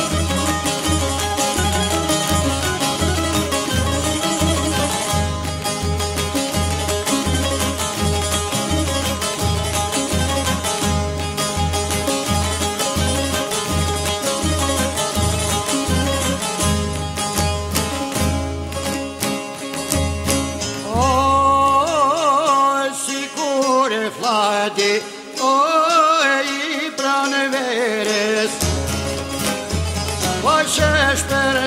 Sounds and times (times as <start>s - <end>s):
Plucked string instrument: 0.0s - 31.6s.